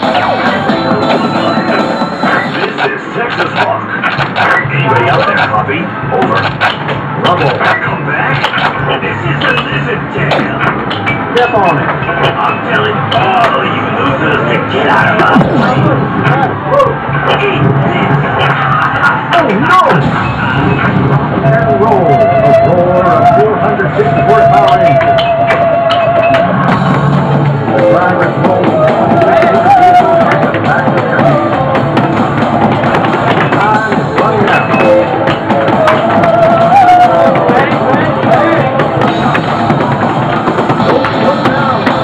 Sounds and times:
Music: 0.0s - 42.0s.

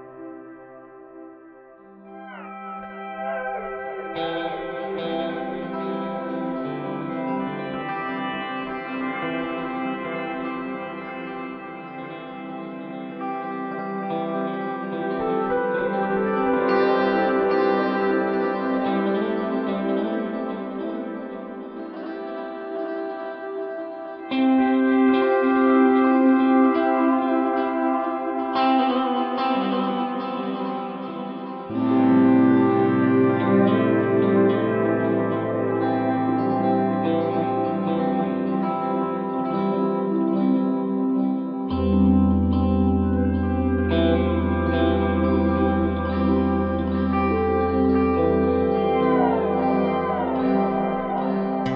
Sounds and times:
Music: 0.0s - 51.7s.

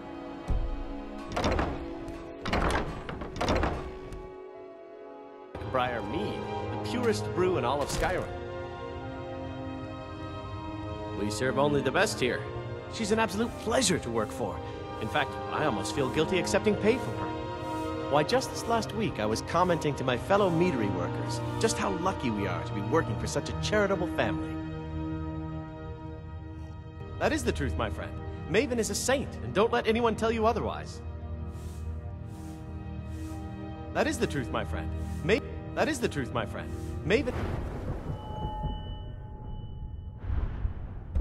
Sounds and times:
Music: 0.0s - 41.2s
Male speech, man speaking: 5.6s - 8.4s, 11.2s - 17.2s, 18.1s - 24.6s, 27.2s - 31.0s, 34.0s - 37.5s.

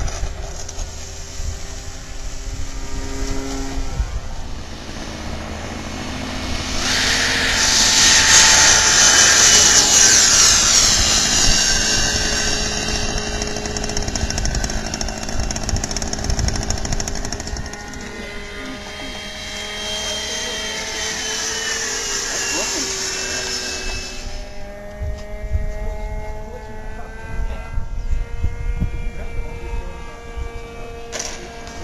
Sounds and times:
Speech: 26.4s - 27.8s, 29.1s - 31.8s.

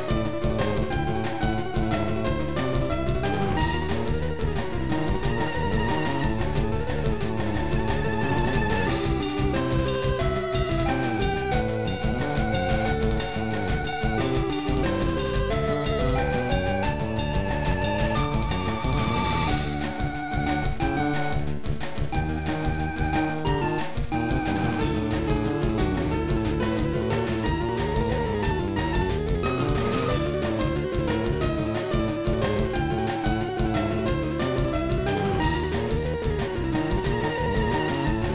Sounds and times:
Video game music: 0.0s - 38.3s.

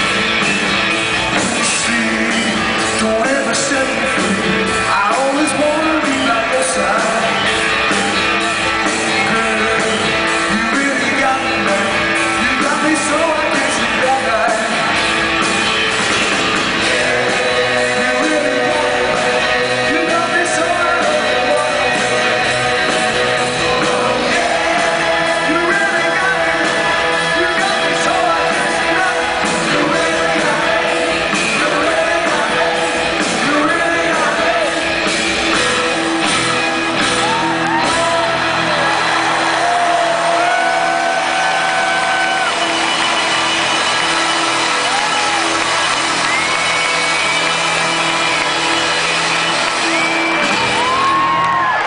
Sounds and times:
Drum kit: 0.0s - 51.8s
Rock music: 0.0s - 51.8s.

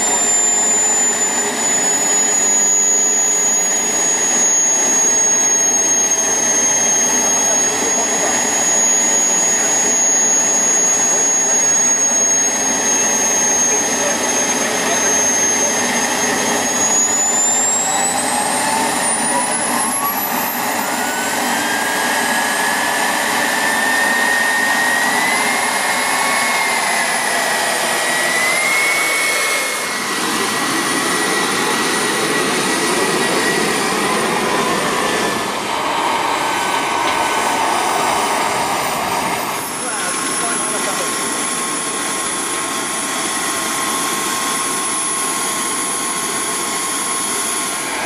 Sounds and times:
Railroad car, train wagon: 30.0s - 48.0s
Train: 30.0s - 48.0s
Subway, metro, underground: 30.9s - 43.8s.

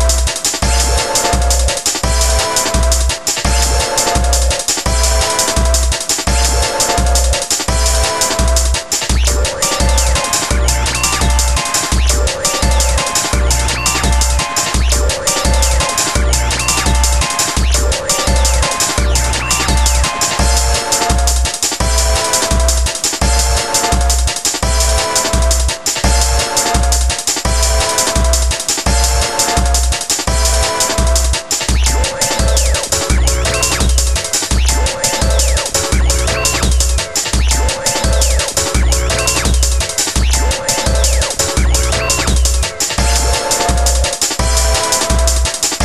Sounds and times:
Video game music: 0.0s - 45.8s.

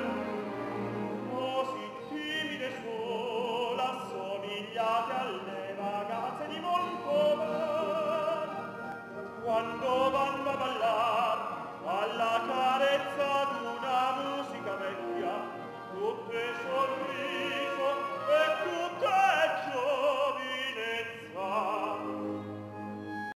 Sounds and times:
Opera: 0.0s - 23.3s.

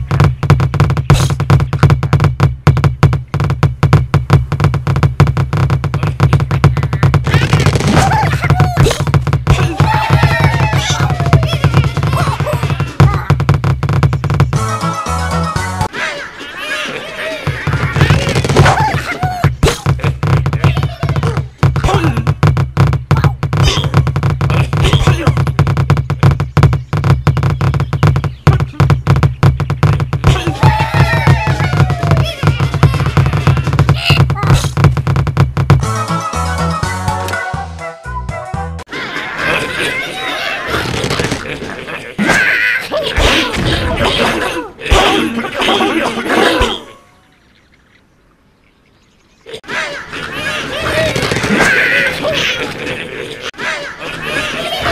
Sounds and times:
Music: 14.6s - 15.9s, 35.8s - 38.9s.

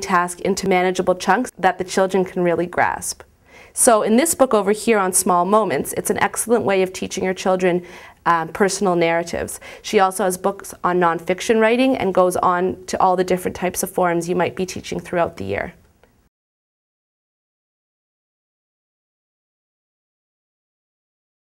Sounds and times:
Speech: 0.0s - 15.8s.

